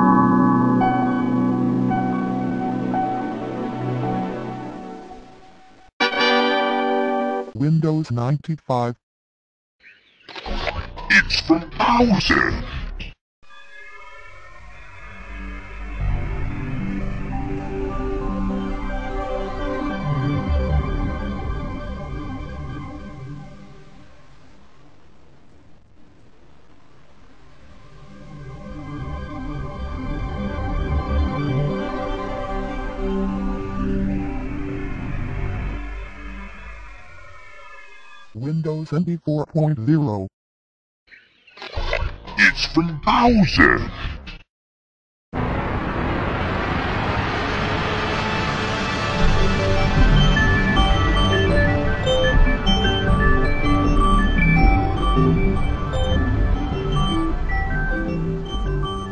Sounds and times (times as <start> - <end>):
Music: 0.0 - 7.6, 13.4 - 24.2, 27.8 - 37.0, 47.8 - 59.1.